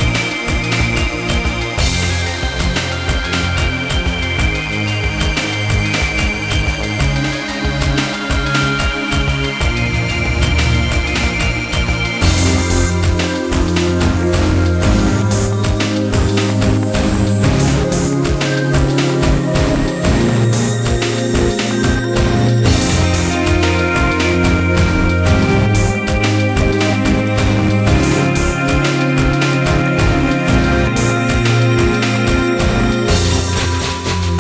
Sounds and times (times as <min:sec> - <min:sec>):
Music: 0:00.0 - 0:34.4.